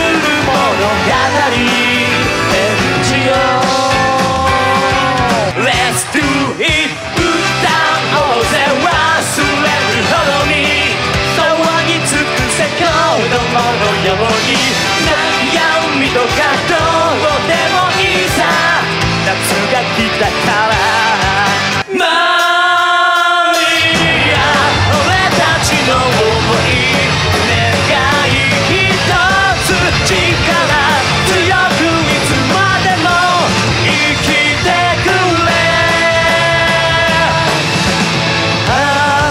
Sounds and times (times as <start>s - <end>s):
Music: 0.0s - 39.3s.